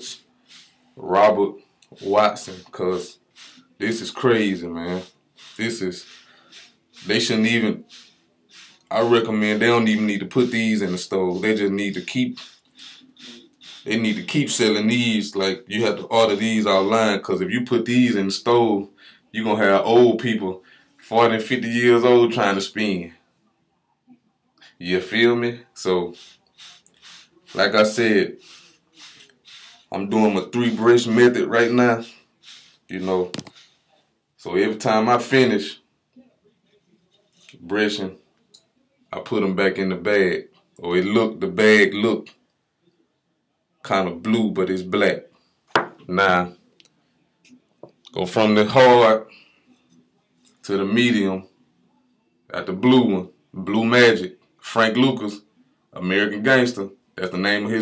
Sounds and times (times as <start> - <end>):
Speech: 0.0 - 0.2, 1.0 - 3.2, 3.8 - 6.1, 7.0 - 7.8, 8.9 - 12.5, 13.8 - 23.2, 24.7 - 26.2, 27.6 - 28.4, 29.9 - 32.1, 32.9 - 33.4, 34.4 - 35.8, 37.5 - 38.2, 39.1 - 42.3, 43.8 - 45.3, 46.0 - 46.6, 48.1 - 49.3, 50.6 - 51.5, 52.5 - 57.8.